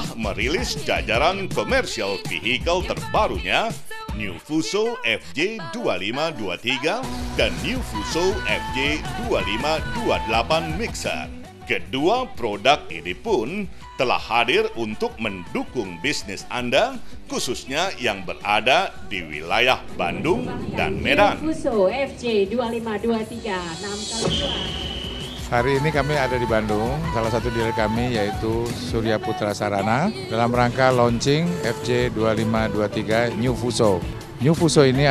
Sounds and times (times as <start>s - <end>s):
Speech: 0.0s - 24.3s, 25.6s - 35.1s
Music: 0.0s - 35.1s.